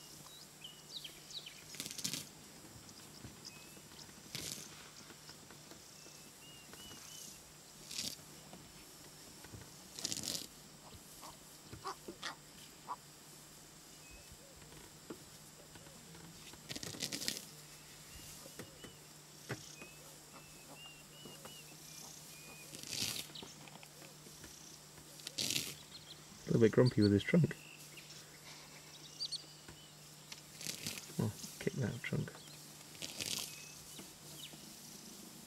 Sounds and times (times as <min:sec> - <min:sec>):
Animal: 0:04.2 - 0:04.8, 0:10.0 - 0:13.0, 0:15.7 - 0:17.5, 0:19.6 - 0:25.9, 0:30.6 - 0:31.4, 0:33.0 - 0:33.7.